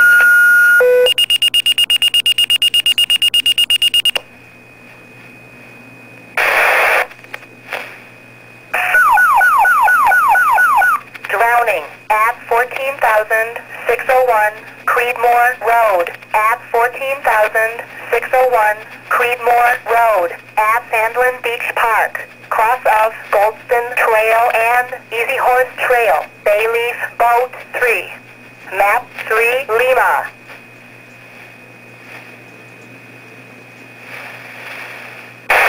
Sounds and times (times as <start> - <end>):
Radio: 6.4 - 7.9, 11.2 - 30.4
Speech: 11.3 - 30.4.